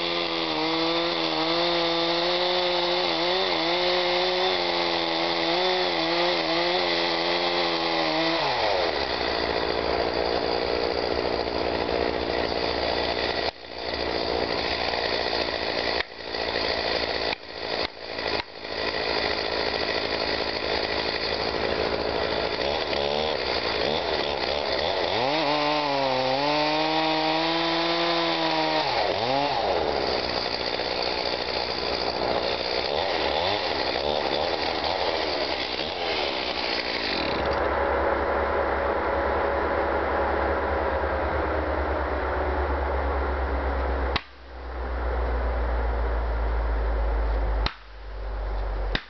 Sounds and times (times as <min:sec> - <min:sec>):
Chainsaw: 0:00.0 - 0:42.0, 0:42.6 - 0:44.5, 0:47.3 - 0:48.0.